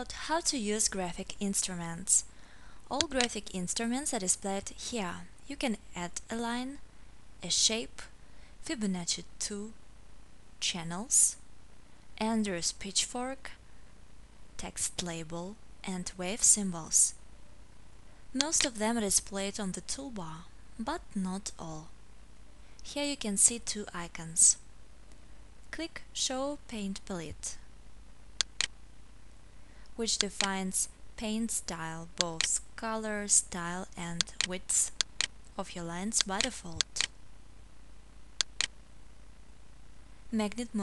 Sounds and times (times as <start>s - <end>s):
Speech: 0.0s - 2.3s, 2.9s - 6.8s, 7.4s - 9.8s, 10.6s - 11.4s, 12.2s - 13.6s, 14.6s - 17.2s, 18.4s - 22.0s, 22.8s - 24.6s, 25.7s - 27.7s, 30.0s - 35.0s, 35.6s - 37.1s, 40.3s - 40.8s.